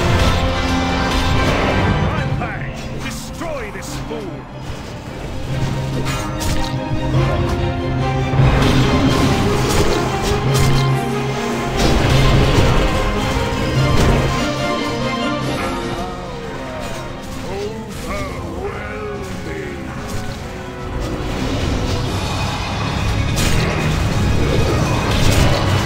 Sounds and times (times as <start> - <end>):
Video game music: 0.0 - 25.8.